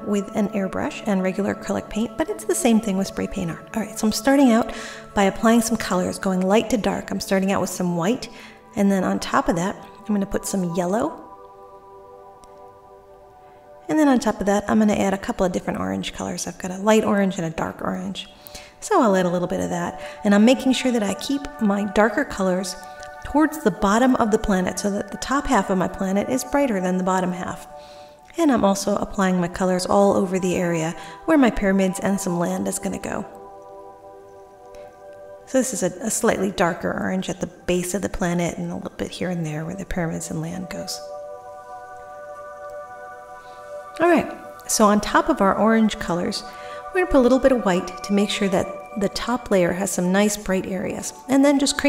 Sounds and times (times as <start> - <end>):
Speech: 0.0 - 11.2, 13.9 - 27.7, 28.3 - 33.3, 35.5 - 41.0, 44.0 - 51.8
Music: 0.0 - 51.8.